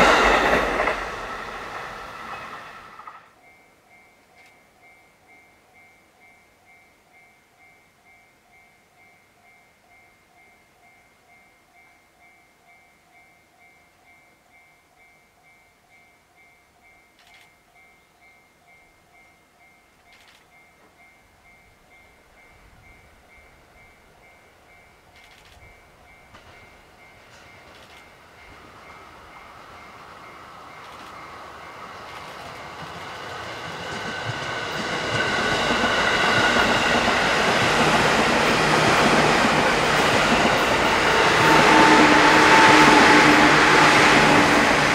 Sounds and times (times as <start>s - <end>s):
Outside, urban or manmade: 0.0s - 44.9s
Train: 0.0s - 44.9s.